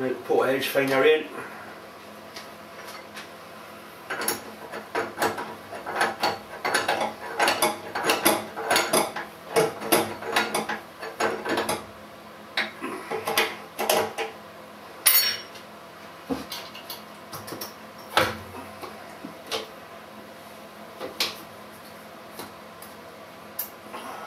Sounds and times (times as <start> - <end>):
Tools: 4.1 - 11.8.